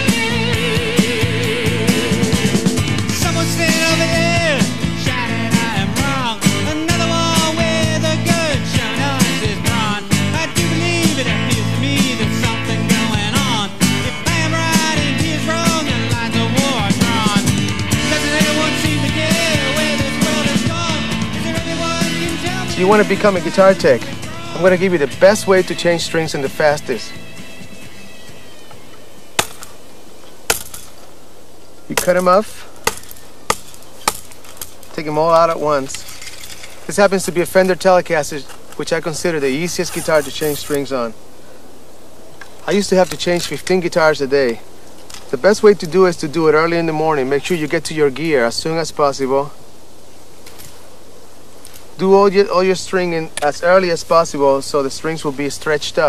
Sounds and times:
Guitar: 0.0s - 29.8s
Speech: 22.6s - 27.2s, 31.9s - 32.7s, 34.9s - 36.0s, 36.9s - 41.2s, 42.6s - 44.6s, 45.3s - 49.6s, 52.0s - 56.0s.

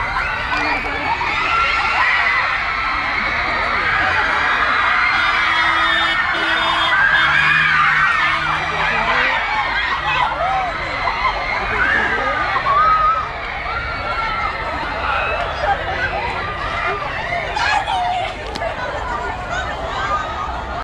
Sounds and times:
Speech: 8.4s - 20.8s.

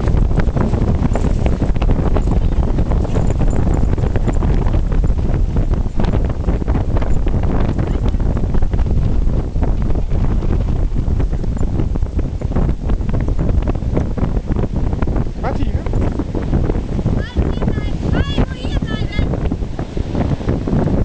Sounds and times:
Wind noise (microphone): 0.0s - 21.0s.

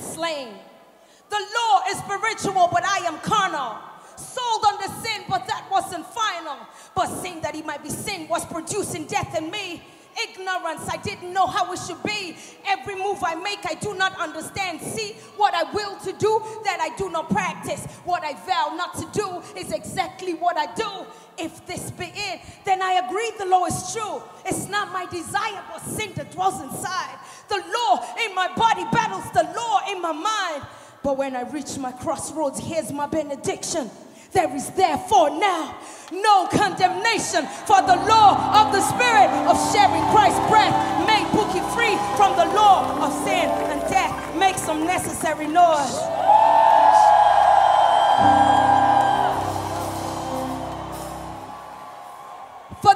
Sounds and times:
Speech: 1.3s - 46.1s.

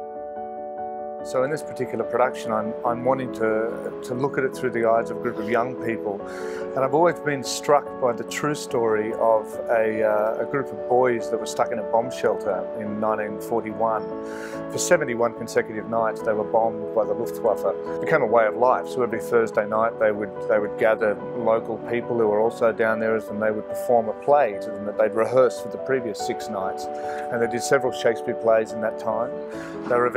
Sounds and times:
Music: 0.0s - 30.1s
Speech: 1.3s - 30.1s.

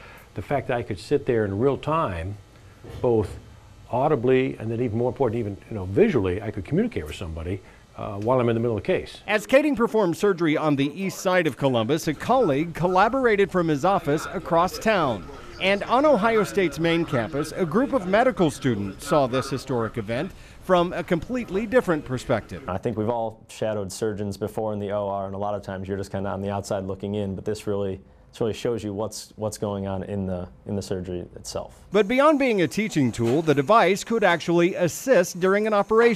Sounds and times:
Speech: 0.4s - 36.1s.

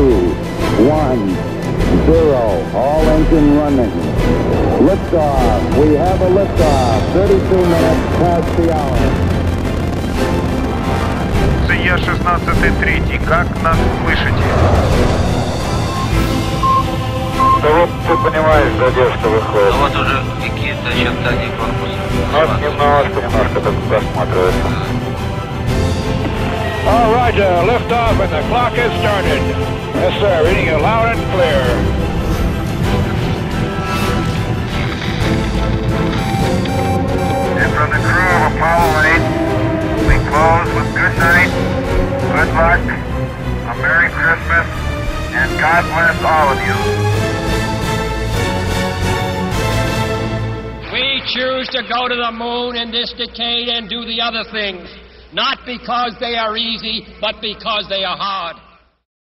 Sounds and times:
Speech: 0.0s - 1.4s, 2.0s - 4.0s, 4.8s - 9.1s, 11.7s - 14.6s, 17.6s - 24.9s, 30.0s - 31.8s, 37.6s - 39.2s, 40.1s - 41.5s, 45.4s - 46.8s, 50.9s - 58.6s
Music: 0.0s - 55.3s.

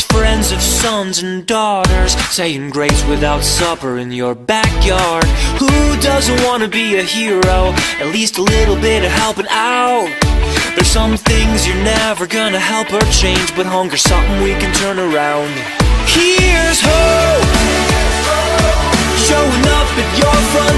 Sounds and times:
Music: 0.0s - 20.7s.

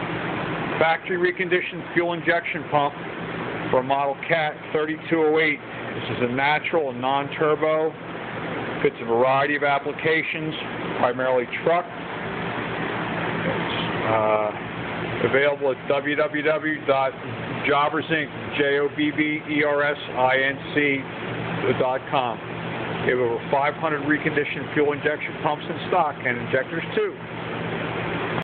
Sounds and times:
Speech: 0.8s - 3.0s, 3.7s - 8.0s, 8.8s - 12.0s, 13.4s - 14.6s, 15.2s - 22.4s, 23.0s - 27.2s.

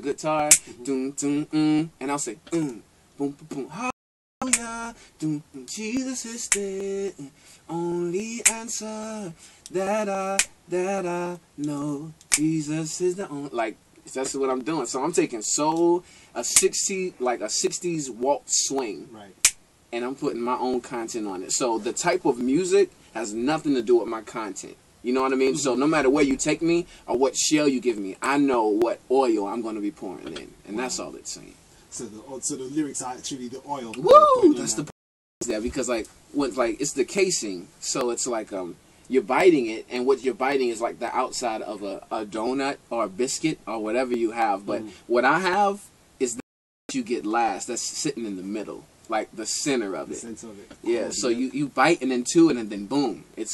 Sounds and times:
Speech: 0.0s - 4.7s, 11.6s - 53.5s.

